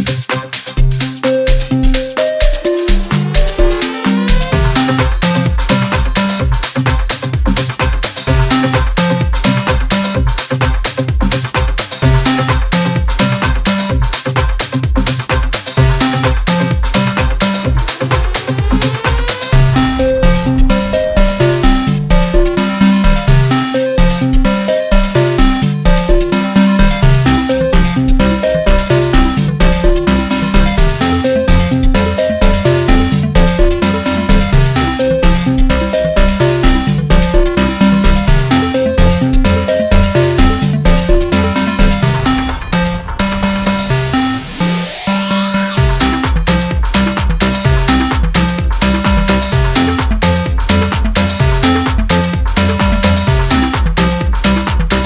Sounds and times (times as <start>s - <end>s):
Music: 0.0s - 55.0s.